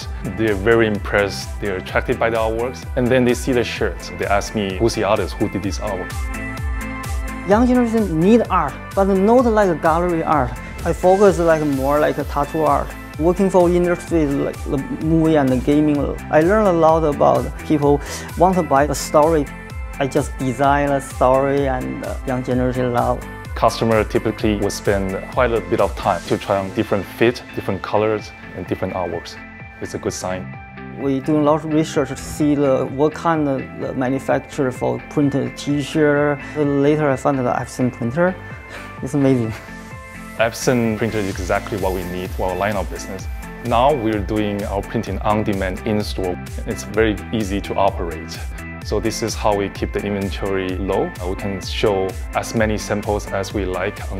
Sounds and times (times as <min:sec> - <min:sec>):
Speech: 0:00.0 - 0:06.1, 0:07.5 - 0:38.4, 0:39.0 - 0:39.6, 0:40.4 - 0:54.1
Music: 0:00.0 - 0:54.1.